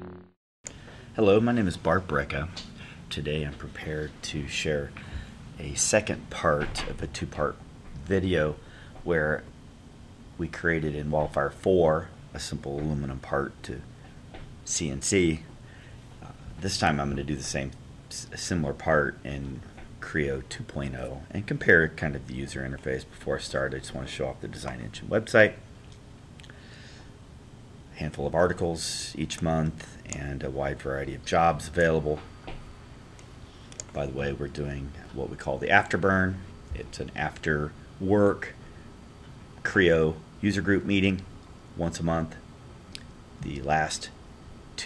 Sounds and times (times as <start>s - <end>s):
Speech: 1.2s - 9.5s, 10.4s - 13.9s, 14.6s - 15.5s, 16.2s - 25.7s, 27.9s - 32.3s, 33.8s - 38.6s, 39.6s - 42.5s, 43.4s - 44.2s.